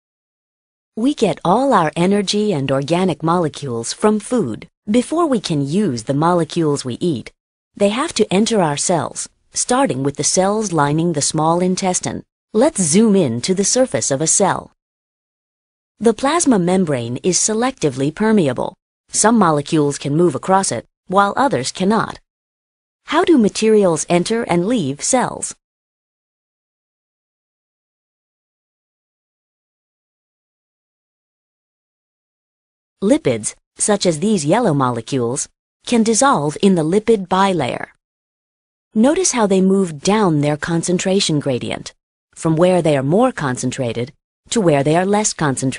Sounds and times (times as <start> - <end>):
Speech: 1.0 - 14.8, 16.0 - 22.2, 23.1 - 25.6, 33.0 - 38.0, 39.0 - 45.7.